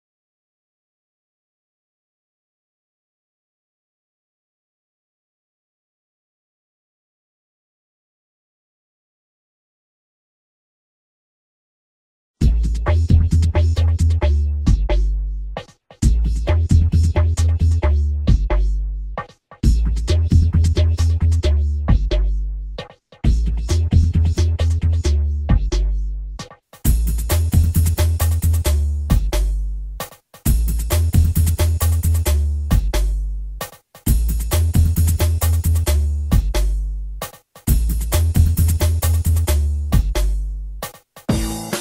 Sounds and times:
Drum and bass: 12.4 - 41.8
Inside, small room: 12.4 - 41.8.

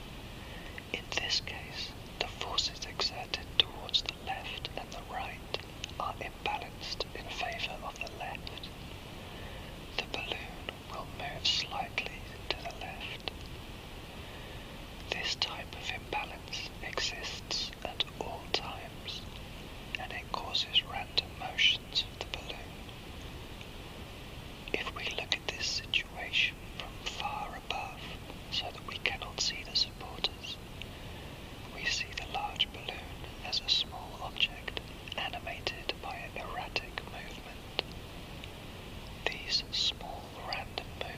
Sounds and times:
White noise: 0.0 - 41.1
Whispering: 0.6 - 8.7, 9.9 - 13.4, 15.1 - 19.2, 20.0 - 22.8, 24.7 - 30.6, 31.7 - 37.9, 39.2 - 41.1.

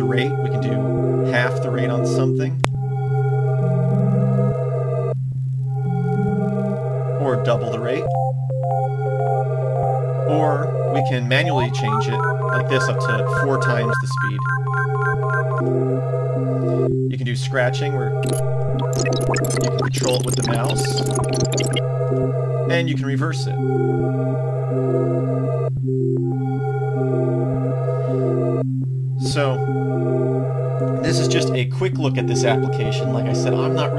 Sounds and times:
Speech: 0.0 - 2.6, 7.2 - 8.1, 10.3 - 14.5, 17.1 - 18.2, 19.8 - 21.1, 22.7 - 23.6, 29.2 - 29.6, 31.0 - 33.9
Music: 0.0 - 33.9.

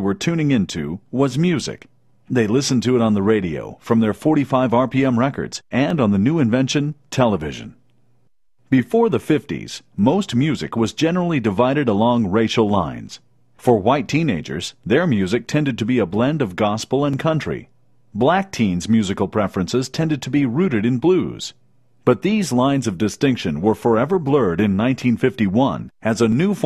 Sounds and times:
Speech: 0.0 - 7.8, 8.7 - 26.6.

